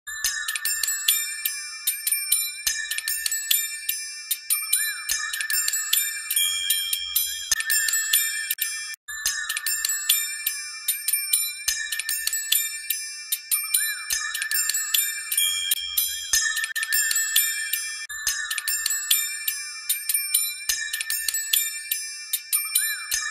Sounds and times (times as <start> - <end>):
Glockenspiel: 0.1 - 23.3.